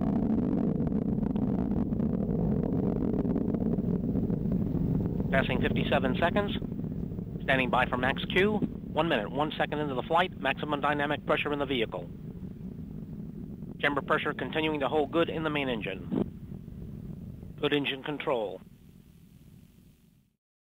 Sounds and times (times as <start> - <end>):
Speech: 5.3 - 6.6, 7.4 - 12.0, 13.8 - 16.1, 17.6 - 18.6.